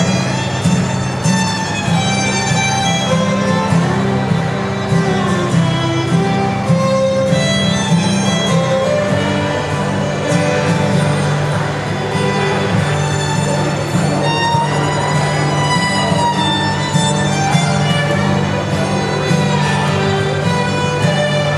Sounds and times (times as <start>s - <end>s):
Violin, fiddle: 0.0s - 21.5s.